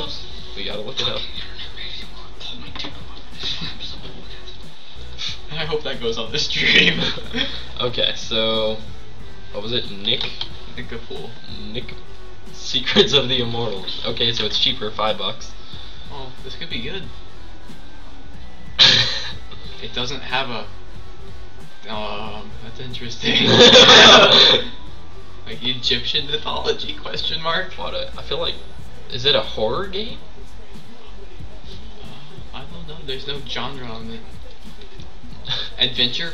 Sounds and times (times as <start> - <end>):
Speech: 0.0 - 4.6, 5.2 - 8.9, 9.6 - 12.0, 12.6 - 15.5, 16.1 - 17.1, 19.8 - 20.7, 21.8 - 24.8, 25.5 - 30.2, 31.7 - 34.3, 35.4 - 36.3.